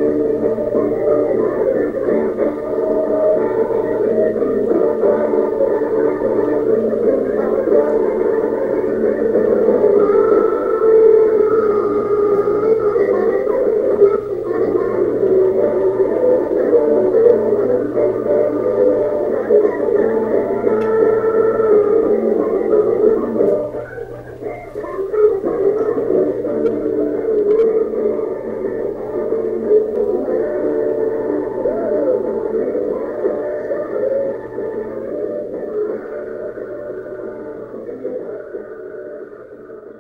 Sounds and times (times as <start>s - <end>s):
Blues: 0.0s - 40.0s.